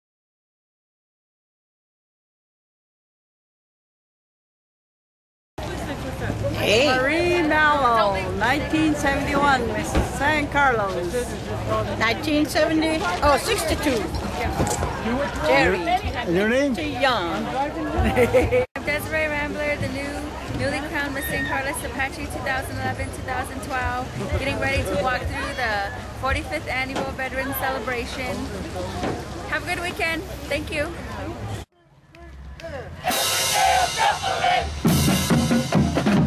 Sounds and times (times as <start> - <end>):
Hubbub, speech noise, speech babble: 5.6 - 34.9
Outside, urban or manmade: 5.6 - 36.2.